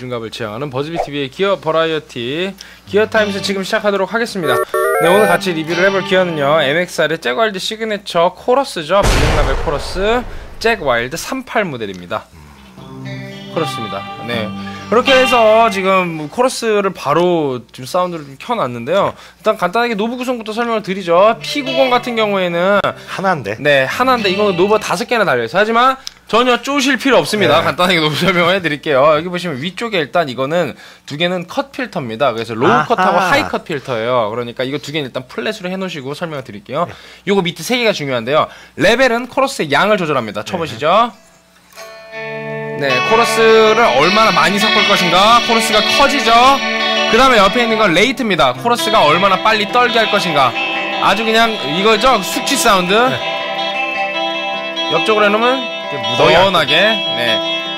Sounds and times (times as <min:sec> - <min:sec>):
Speech: 0:00.0 - 0:12.4, 0:13.6 - 0:41.2, 0:42.8 - 0:53.2, 0:54.9 - 0:57.4
Music: 0:02.9 - 0:03.8, 0:04.4 - 0:06.8, 0:12.3 - 0:16.4, 0:20.8 - 0:25.1, 0:41.7 - 0:57.7.